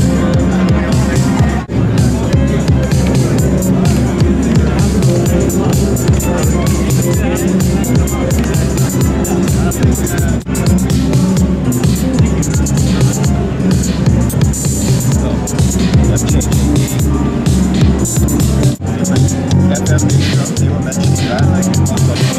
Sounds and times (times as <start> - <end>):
Drum machine: 0.0 - 22.3.